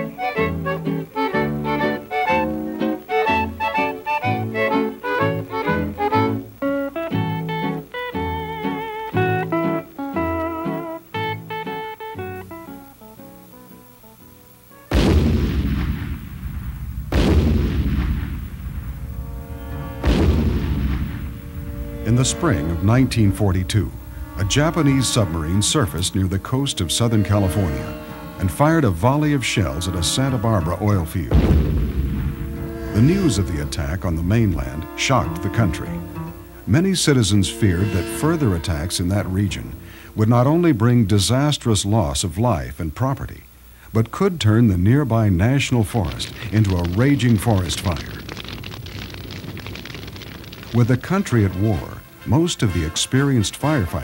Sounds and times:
Music: 0.0s - 16.2s, 17.9s - 41.8s, 50.8s - 54.0s
Speech: 22.0s - 31.4s, 32.9s - 36.1s, 36.7s - 48.2s, 50.8s - 54.0s.

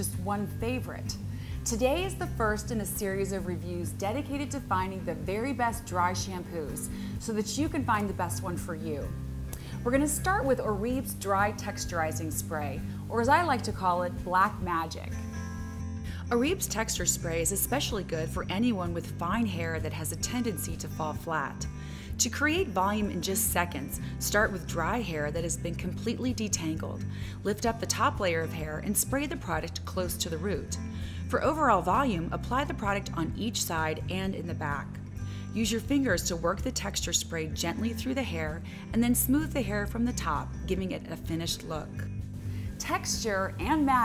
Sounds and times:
Speech: 0.0s - 9.1s, 9.8s - 15.1s, 16.3s - 21.6s, 22.2s - 34.9s, 35.6s - 42.0s, 42.8s - 44.0s
Music: 0.0s - 44.0s.

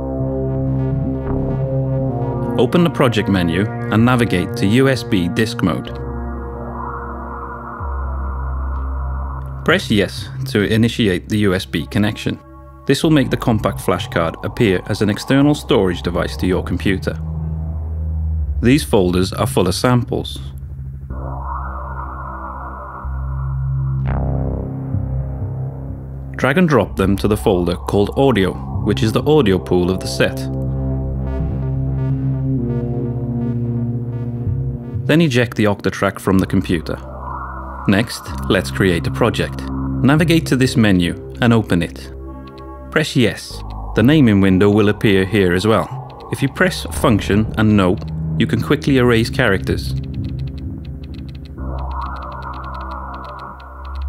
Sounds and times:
Music: 0.0s - 54.0s
Speech: 2.6s - 6.0s, 9.6s - 17.2s, 18.6s - 20.5s, 26.4s - 30.6s, 35.1s - 37.0s, 37.9s - 42.2s, 42.9s - 50.0s.

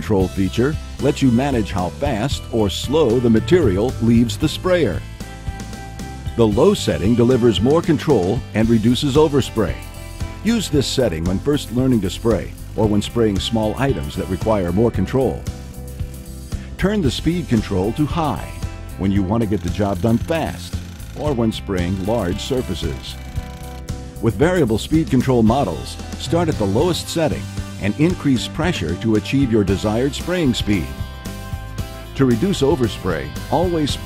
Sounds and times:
Speech: 0.0s - 5.0s, 6.3s - 9.8s, 10.4s - 15.4s, 16.8s - 23.2s, 24.2s - 30.9s, 32.2s - 34.0s
Music: 0.0s - 34.0s.

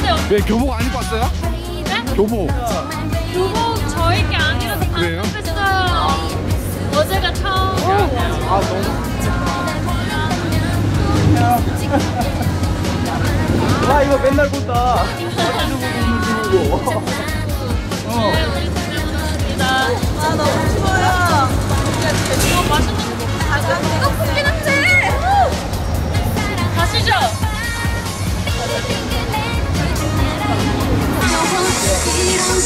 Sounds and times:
Music: 0.0s - 32.6s.

